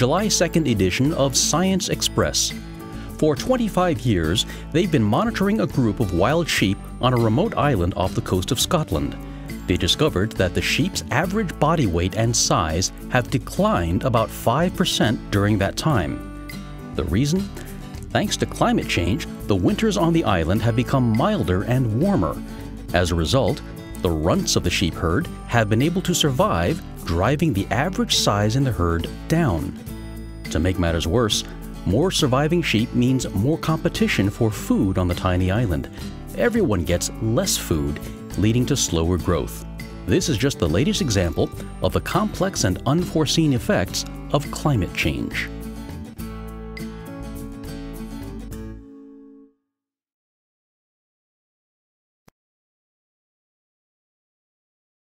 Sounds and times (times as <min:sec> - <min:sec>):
Speech: 0:00.0 - 0:02.6, 0:03.2 - 0:16.2, 0:17.0 - 0:29.8, 0:30.5 - 0:45.5
Music: 0:00.0 - 0:49.8.